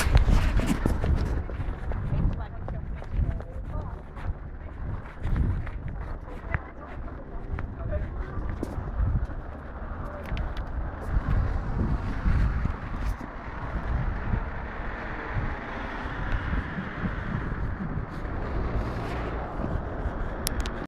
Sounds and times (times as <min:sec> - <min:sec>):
Car: 0:00.0 - 0:20.8.